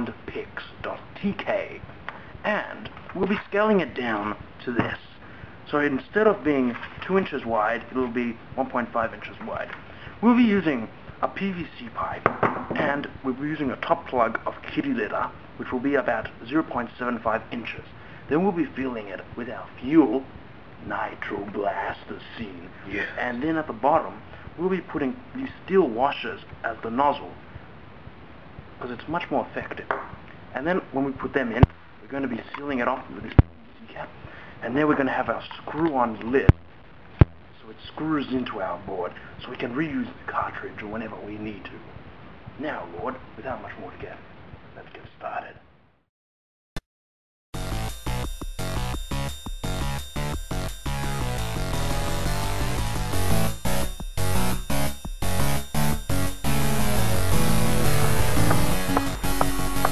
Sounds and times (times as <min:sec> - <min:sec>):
Speech: 0:00.0 - 0:27.4, 0:28.8 - 0:36.6, 0:37.6 - 0:42.0, 0:42.6 - 0:45.6.